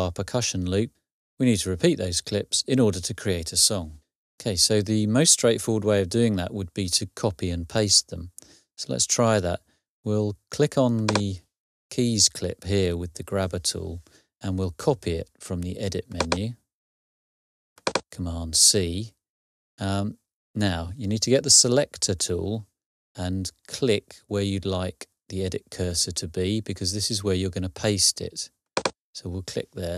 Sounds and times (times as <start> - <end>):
Speech: 0.0 - 16.6, 18.1 - 19.2, 19.8 - 28.5, 29.2 - 29.9.